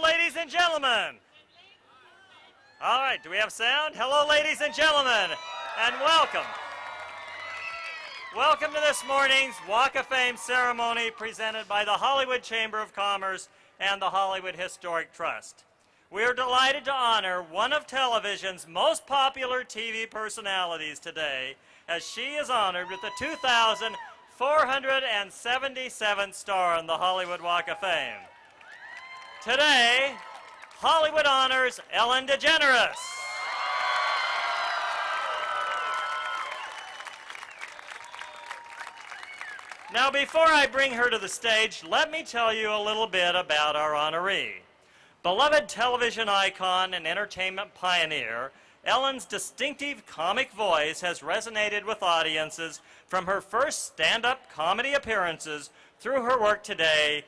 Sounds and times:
Speech: 0.0s - 6.5s, 8.4s - 15.6s, 16.2s - 28.2s, 30.8s - 33.0s, 39.9s - 44.6s, 45.3s - 57.2s.

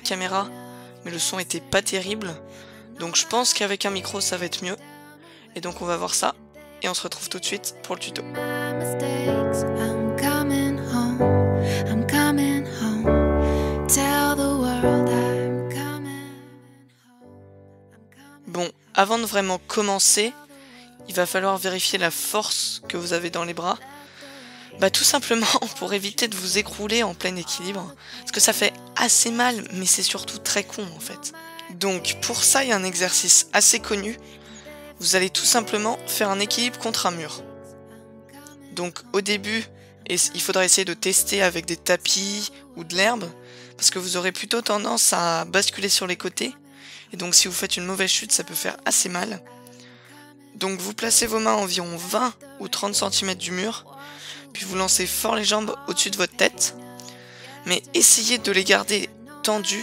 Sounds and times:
Speech: 0.0s - 2.4s, 3.0s - 4.8s, 5.6s - 8.4s, 18.4s - 23.9s, 24.8s - 34.2s, 35.0s - 37.4s, 38.5s - 49.4s, 50.6s - 53.9s, 54.5s - 56.8s, 57.4s - 59.8s
Music: 0.0s - 59.8s.

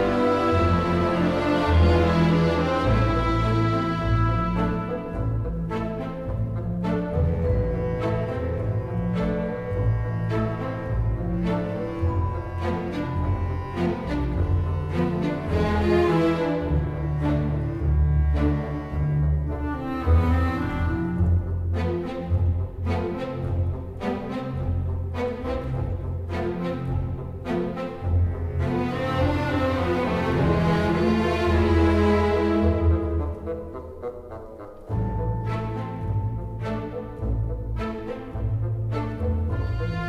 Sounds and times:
Music: 0.0s - 40.0s.

